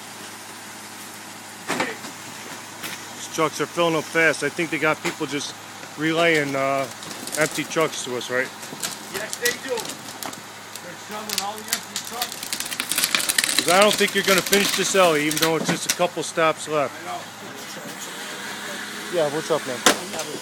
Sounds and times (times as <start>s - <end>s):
Truck: 0.0s - 20.4s
Speech: 3.2s - 8.5s, 9.1s - 9.9s, 10.8s - 12.4s, 13.6s - 18.0s, 18.6s - 20.4s.